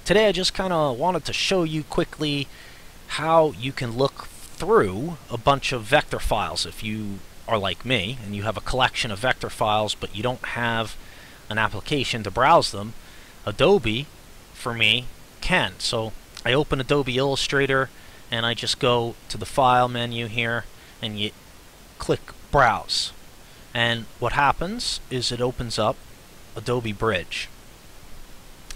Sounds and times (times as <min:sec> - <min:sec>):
Speech: 0:00.0 - 0:02.5, 0:03.1 - 0:21.4, 0:22.0 - 0:23.2, 0:23.8 - 0:26.0, 0:26.6 - 0:27.5.